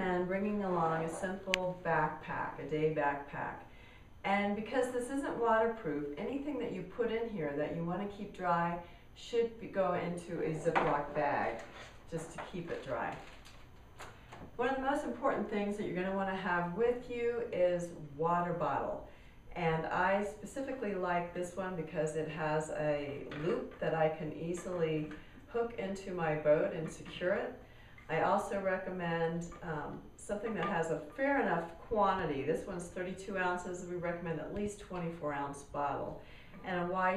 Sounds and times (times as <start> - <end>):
Speech: 0.0 - 13.3, 14.6 - 37.1.